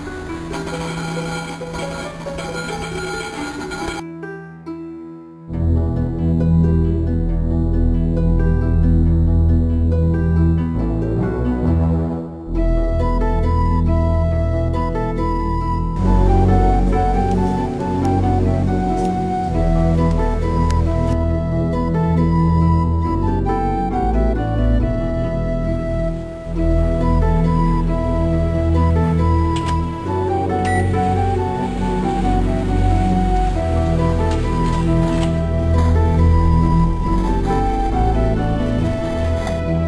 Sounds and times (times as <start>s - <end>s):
Music: 0.0s - 39.8s.